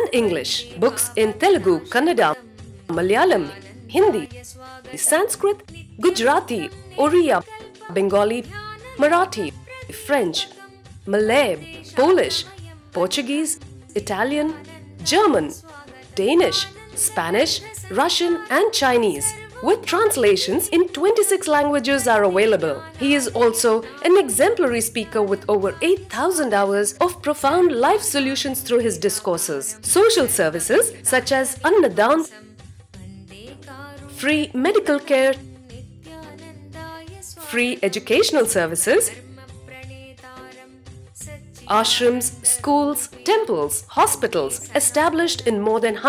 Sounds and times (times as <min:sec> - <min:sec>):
Speech: 0:00.0 - 0:32.4, 0:34.1 - 0:35.5, 0:37.2 - 0:39.2, 0:41.6 - 0:46.0
Music: 0:00.0 - 0:46.0.